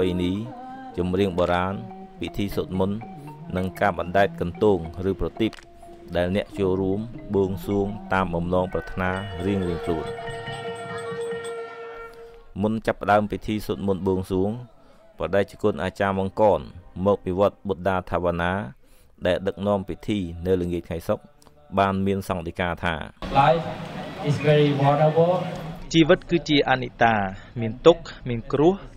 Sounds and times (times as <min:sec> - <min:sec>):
Music: 0:00.0 - 0:18.2, 0:23.2 - 0:26.3
Speech: 0:06.1 - 0:10.1, 0:12.6 - 0:21.2, 0:21.8 - 0:28.9.